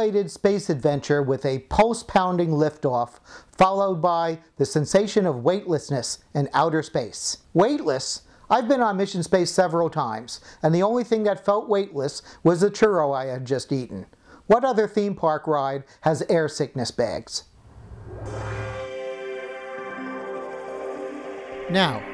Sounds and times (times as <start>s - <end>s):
Speech: 0.0s - 17.5s, 21.7s - 22.0s.